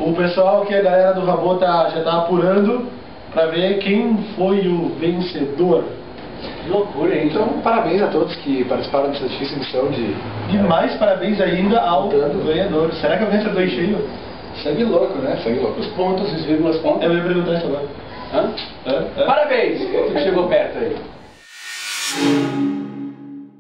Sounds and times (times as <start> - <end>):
Speech: 0.0 - 6.0, 6.6 - 21.0.